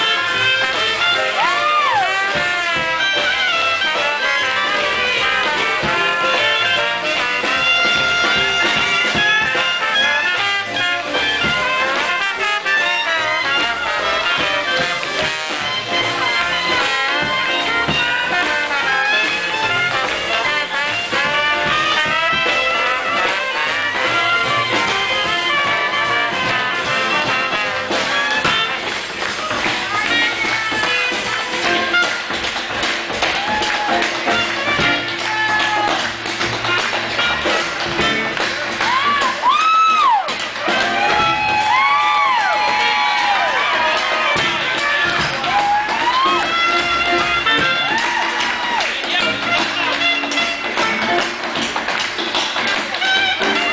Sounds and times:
Music: 0.0s - 53.7s.

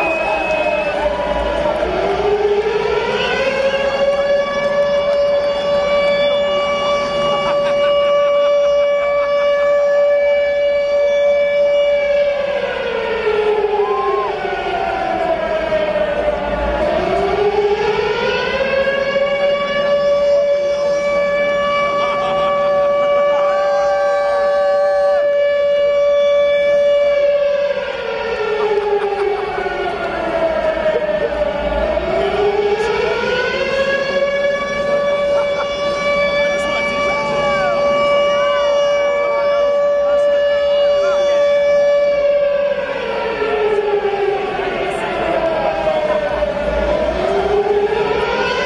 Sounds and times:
Civil defense siren: 0.0s - 48.6s.

